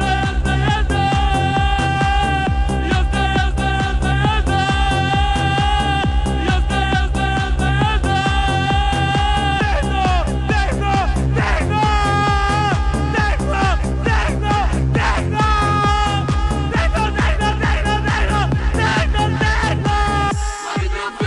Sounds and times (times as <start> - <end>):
Techno: 0.0 - 21.2.